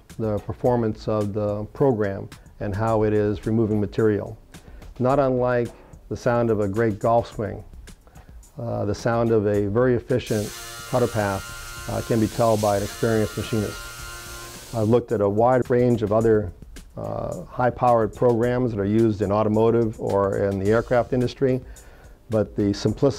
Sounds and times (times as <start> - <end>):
Music: 0.0 - 23.1
Speech: 0.2 - 4.4, 5.0 - 7.6, 8.6 - 13.8, 14.8 - 21.7, 22.3 - 23.1.